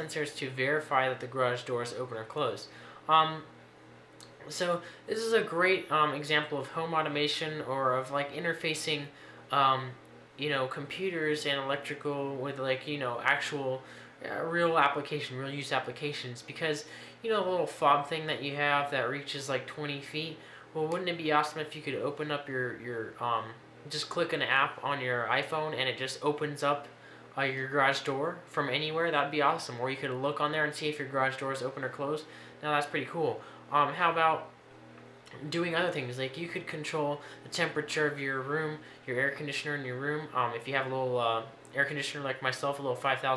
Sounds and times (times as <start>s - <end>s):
Speech: 0.0s - 3.5s, 4.2s - 34.5s, 35.3s - 43.3s.